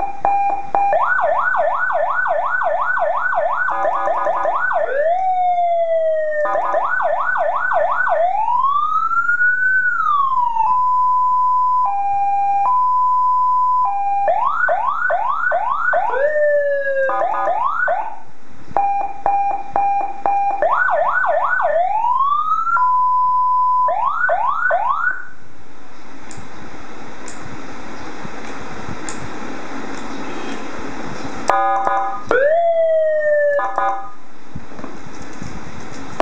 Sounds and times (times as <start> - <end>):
Police car (siren): 0.0 - 18.2, 18.8 - 25.4, 31.5 - 34.2.